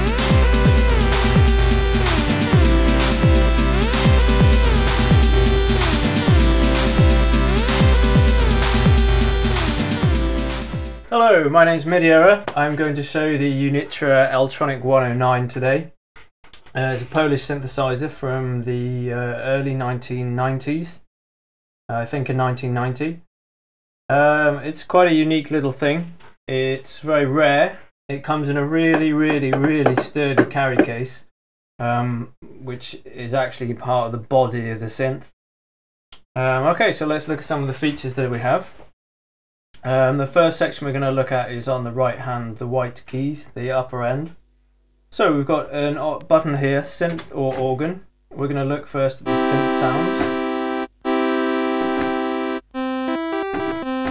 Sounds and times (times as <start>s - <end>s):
Speech: 11.1s - 16.0s, 16.7s - 21.1s, 21.9s - 23.3s, 24.1s - 35.3s, 36.4s - 38.8s, 39.8s - 44.4s, 45.1s - 50.4s.